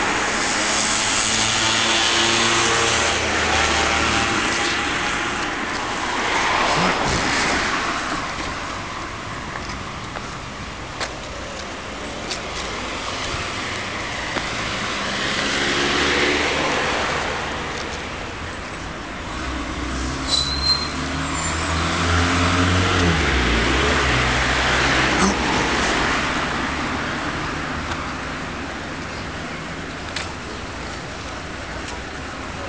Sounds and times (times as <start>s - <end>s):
Vehicle: 0.0s - 32.6s.